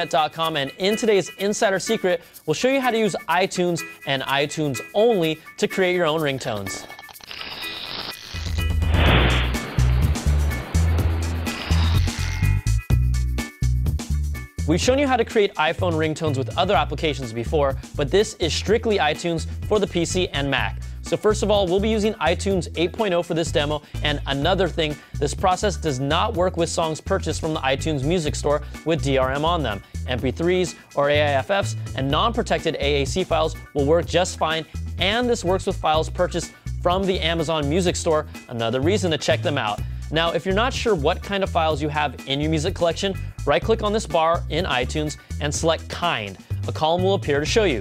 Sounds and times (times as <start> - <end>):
Speech: 0.0 - 6.8, 14.7 - 47.8
Music: 0.0 - 47.8.